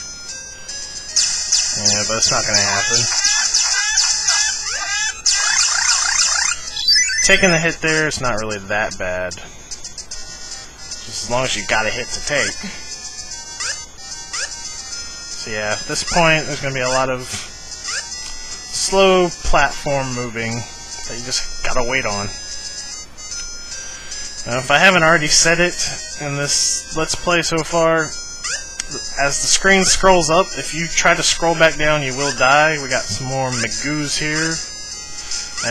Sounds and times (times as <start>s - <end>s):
Music: 0.0s - 35.7s
Speech: 1.8s - 3.2s, 7.2s - 9.5s, 11.1s - 12.6s, 15.4s - 17.5s, 18.8s - 22.4s, 24.5s - 28.1s, 29.2s - 34.6s.